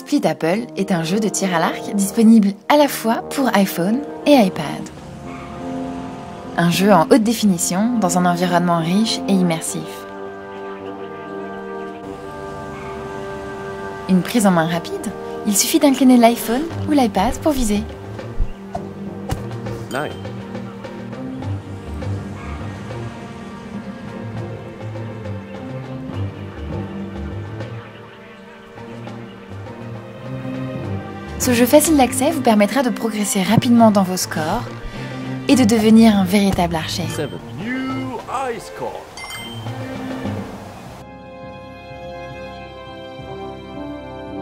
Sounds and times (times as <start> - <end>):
Speech: 0.0 - 4.9, 6.6 - 10.0, 14.1 - 17.9, 31.4 - 34.7, 35.5 - 39.1
Music: 0.0 - 44.4.